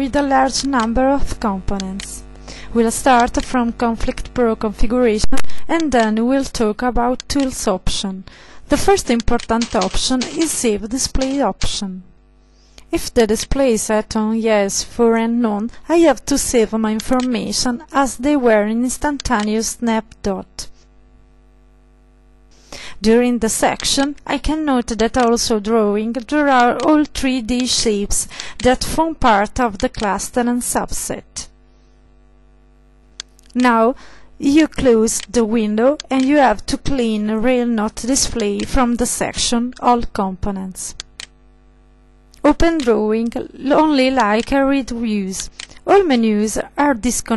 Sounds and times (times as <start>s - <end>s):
Speech: 0.0s - 12.1s, 12.9s - 20.7s, 23.0s - 31.5s, 33.5s - 41.0s, 42.4s - 47.3s.